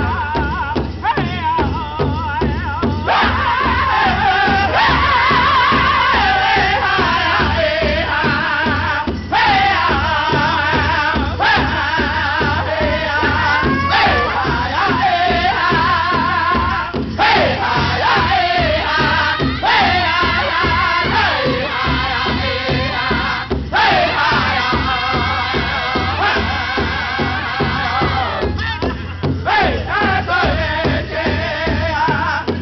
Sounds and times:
Male singing: 0:00.0 - 0:32.6
Music: 0:00.0 - 0:32.6.

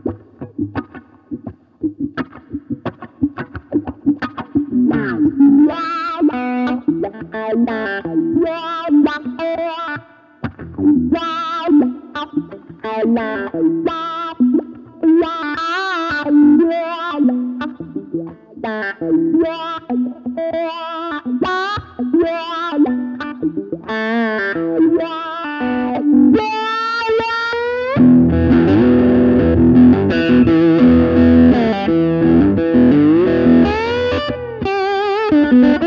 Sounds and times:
Distortion: 0:00.0 - 0:35.8
Electric guitar: 0:00.0 - 0:35.8
Tapping (guitar technique): 0:00.0 - 0:35.8.

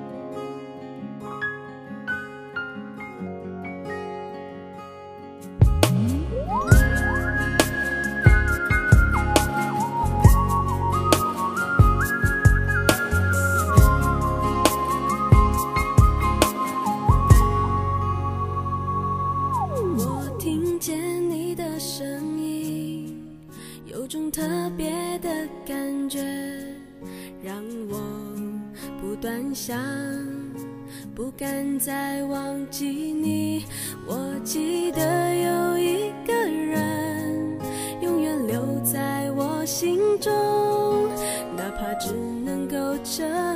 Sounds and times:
Music: 0:00.0 - 0:43.5.

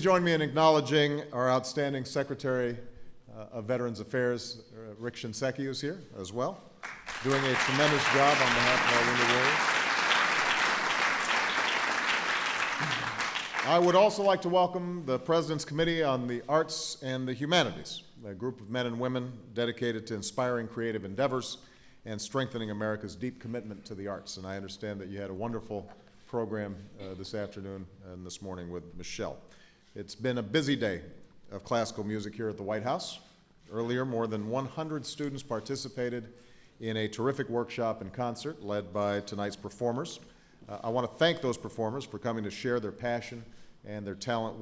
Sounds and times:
Speech: 0:00.0 - 0:09.6, 0:13.6 - 0:29.4, 0:30.0 - 0:44.6.

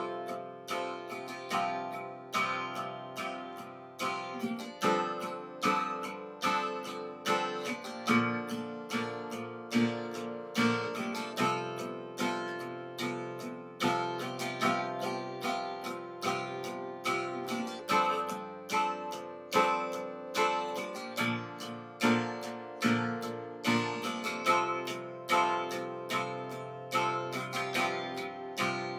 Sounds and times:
Acoustic guitar: 0:00.0 - 0:28.9.

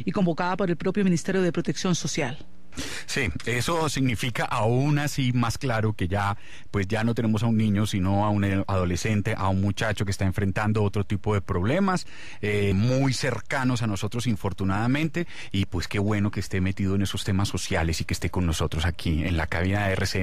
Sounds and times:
Speech: 0:00.0 - 0:02.4, 0:03.1 - 0:20.2.

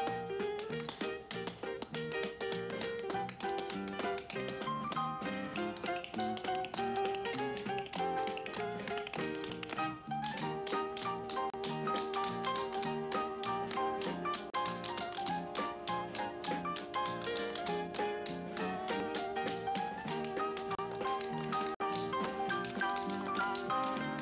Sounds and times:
Music: 0:00.0 - 0:24.2.

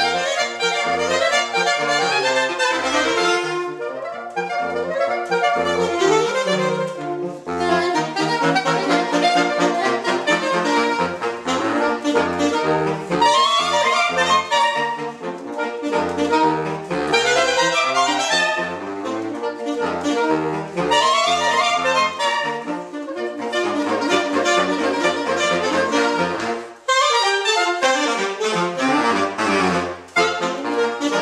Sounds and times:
Brass instrument: 0:00.0 - 0:31.2
Saxophone: 0:00.0 - 0:31.2.

